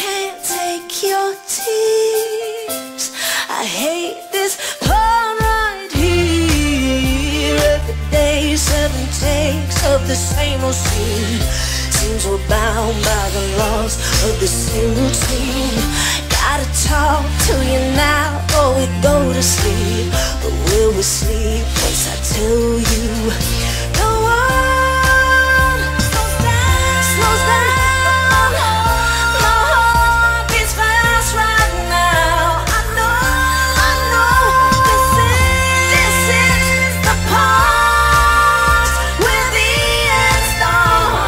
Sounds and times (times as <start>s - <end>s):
Pop music: 0.0s - 41.2s.